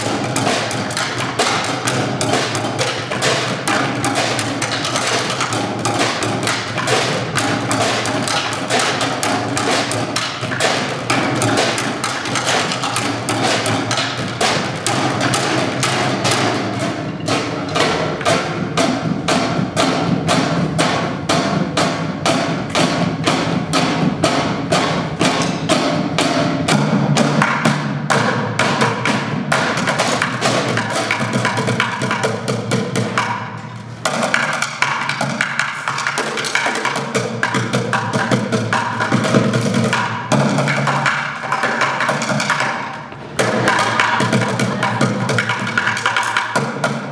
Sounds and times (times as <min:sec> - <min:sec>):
Wood block: 0:00.0 - 0:47.1.